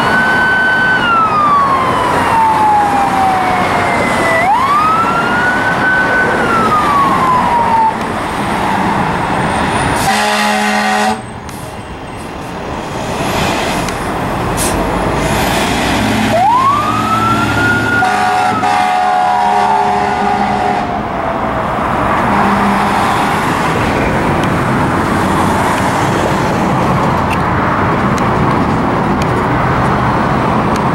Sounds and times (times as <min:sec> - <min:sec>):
Fire engine, fire truck (siren): 0:00.0 - 0:12.2, 0:14.4 - 0:27.4.